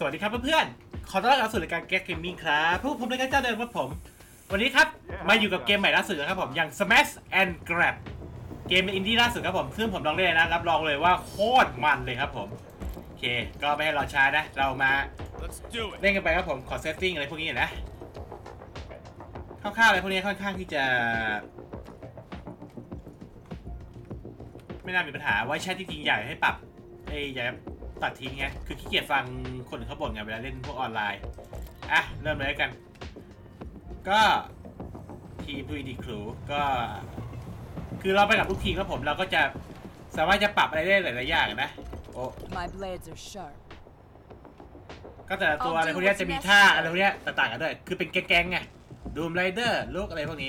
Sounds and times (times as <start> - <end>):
Speech: 0.0 - 8.0, 8.7 - 12.6, 13.2 - 17.8, 19.6 - 21.5, 24.8 - 31.2, 31.9 - 32.8, 34.0 - 34.5, 35.4 - 37.1, 38.0 - 39.6, 40.2 - 43.6, 45.3 - 50.4
Music: 0.0 - 50.4.